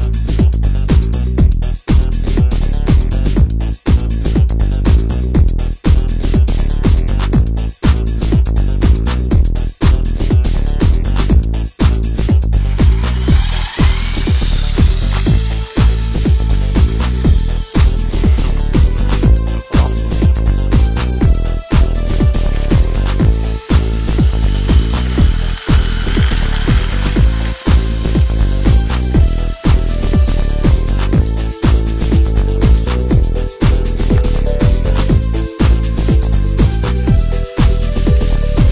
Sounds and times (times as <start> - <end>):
Music: 0.0 - 38.7.